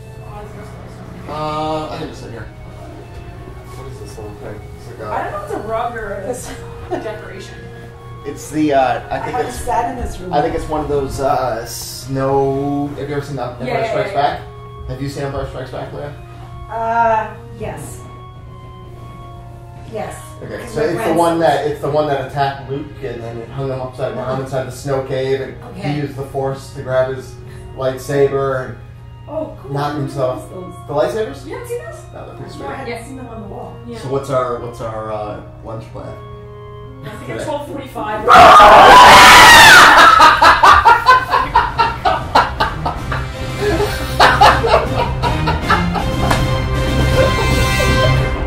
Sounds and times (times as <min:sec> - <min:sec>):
Music: 0:00.0 - 0:48.4.